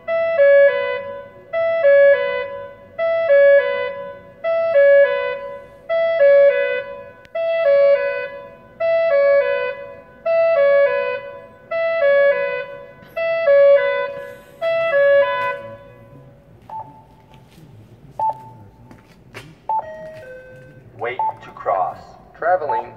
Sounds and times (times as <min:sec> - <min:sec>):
Wind instrument, woodwind instrument: 0:07.4 - 0:17.7.